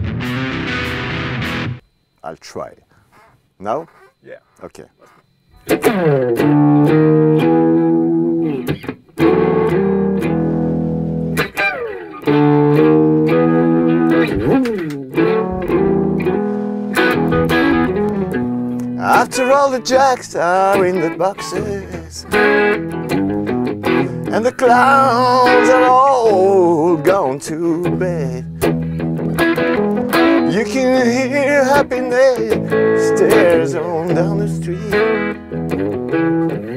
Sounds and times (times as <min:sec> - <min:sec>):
Music: 0:00.0 - 0:01.8, 0:05.4 - 0:36.7.